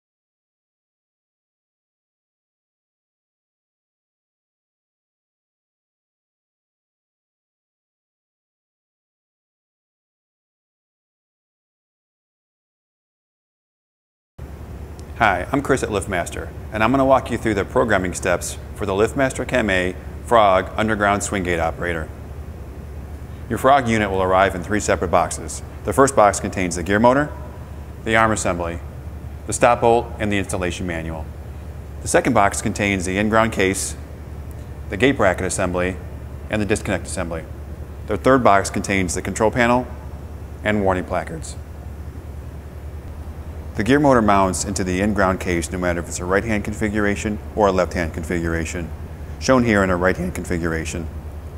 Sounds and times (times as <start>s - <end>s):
Speech: 15.2s - 22.1s, 23.5s - 28.8s, 29.5s - 31.3s, 32.0s - 34.0s, 34.9s - 37.5s, 38.1s - 39.9s, 40.6s - 41.6s, 43.8s - 51.1s.